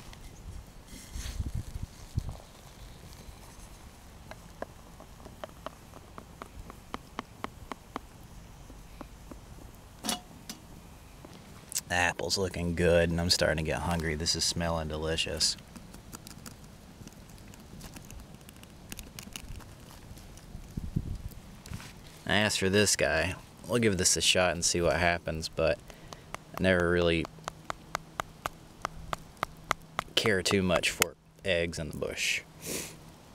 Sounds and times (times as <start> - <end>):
Fire: 0.0 - 33.3.